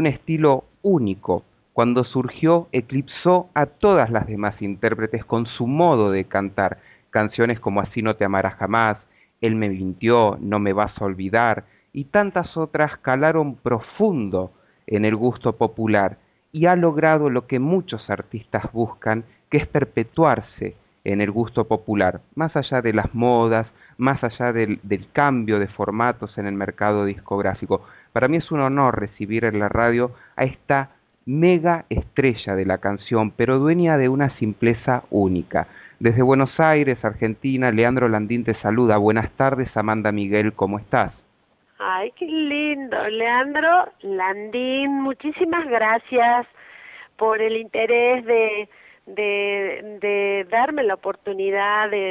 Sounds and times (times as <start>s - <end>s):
Speech: 0.0s - 41.2s, 41.8s - 46.5s, 47.2s - 52.1s.